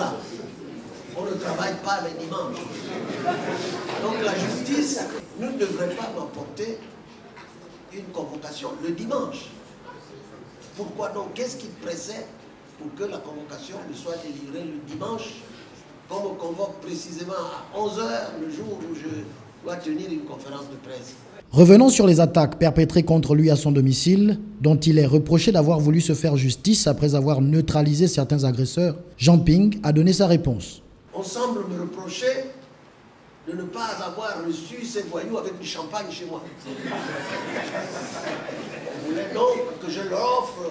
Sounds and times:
Speech: 0:00.0 - 0:03.1, 0:03.9 - 0:07.0, 0:07.6 - 0:15.5, 0:16.1 - 0:32.6, 0:33.5 - 0:37.0, 0:38.8 - 0:40.7.

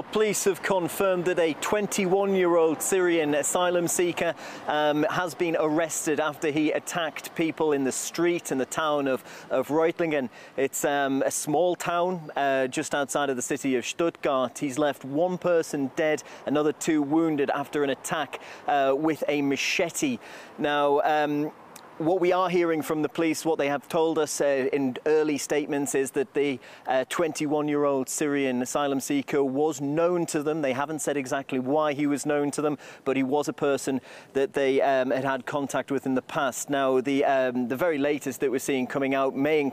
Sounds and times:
Speech: 0:00.0 - 0:39.7.

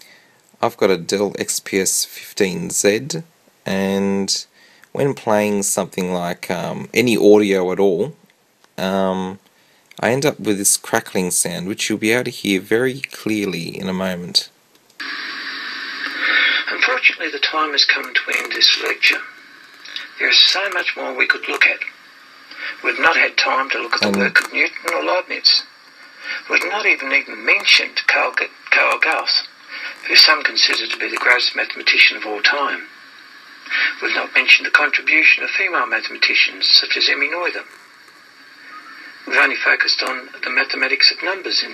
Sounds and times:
Speech: 0:00.6 - 0:08.2, 0:08.8 - 0:09.4, 0:10.0 - 0:14.6, 0:16.7 - 0:19.3, 0:19.9 - 0:21.9, 0:22.6 - 0:25.7, 0:26.3 - 0:33.0, 0:33.7 - 0:37.8, 0:39.2 - 0:41.7.

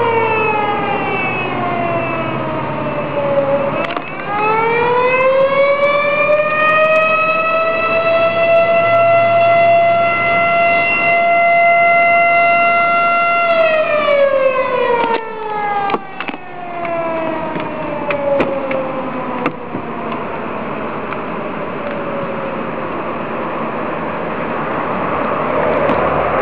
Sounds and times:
Siren: 0:00.0 - 0:26.4.

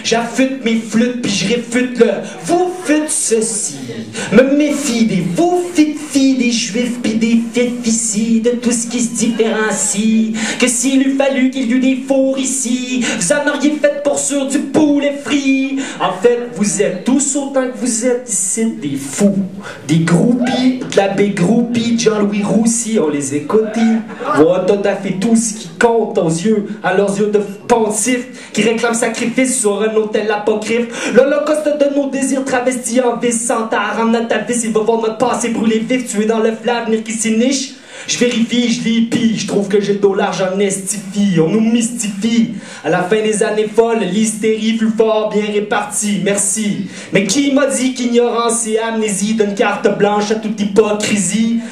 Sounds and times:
Speech: 0:00.0 - 0:51.7.

